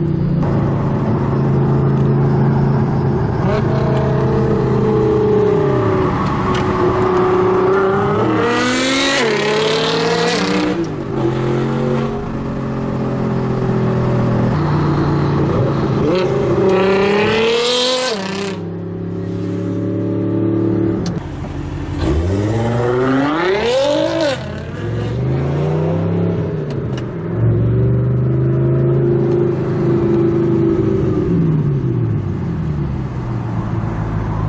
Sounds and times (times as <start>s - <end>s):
Car: 0.0s - 34.4s
Outside, urban or manmade: 0.0s - 34.4s.